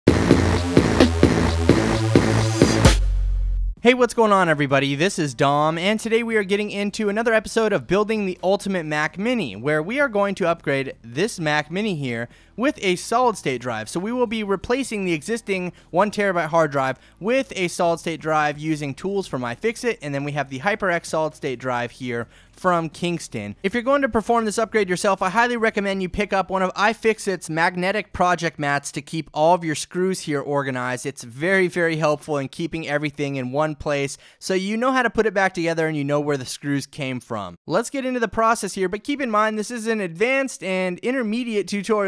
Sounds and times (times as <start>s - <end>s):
Sampler: 0.1s - 3.7s.